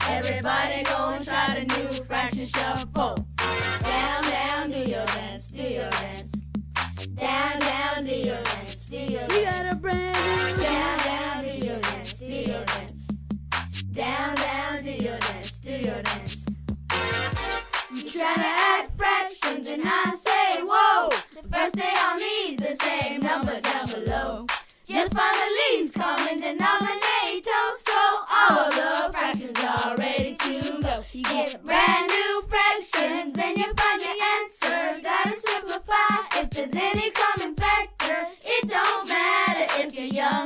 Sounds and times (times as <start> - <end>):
Music: 0.0 - 40.4.